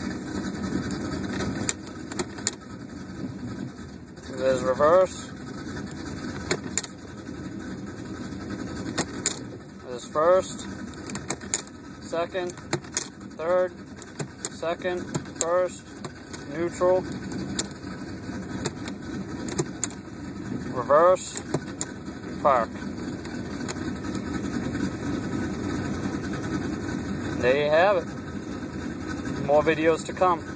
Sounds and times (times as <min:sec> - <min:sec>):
Speech: 0:04.3 - 0:05.3, 0:09.8 - 0:10.6, 0:12.0 - 0:12.6, 0:13.4 - 0:13.8, 0:14.6 - 0:15.9, 0:16.5 - 0:17.0, 0:20.7 - 0:21.4, 0:22.4 - 0:22.8, 0:27.4 - 0:28.1, 0:29.4 - 0:30.5.